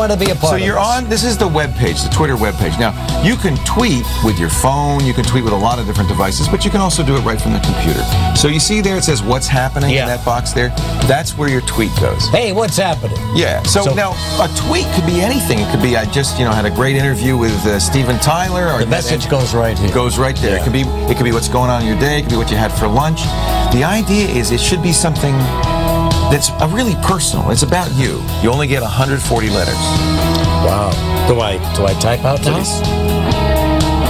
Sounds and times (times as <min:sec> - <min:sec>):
Speech: 0:00.0 - 0:25.5, 0:26.3 - 0:29.9, 0:30.6 - 0:32.8
Music: 0:00.0 - 0:34.0.